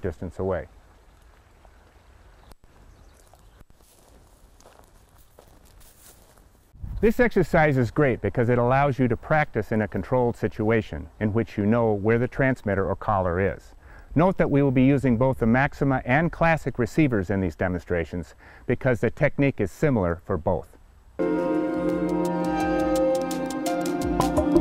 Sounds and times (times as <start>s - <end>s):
Speech: 0.0s - 0.7s, 7.0s - 20.8s.